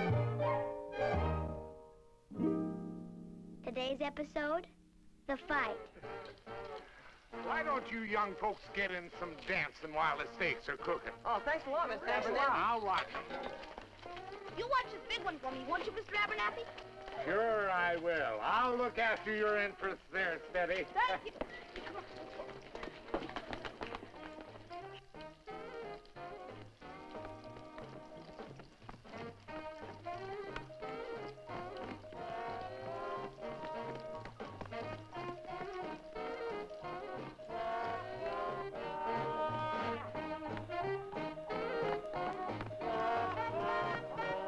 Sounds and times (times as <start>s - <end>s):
Music: 0.0s - 44.4s.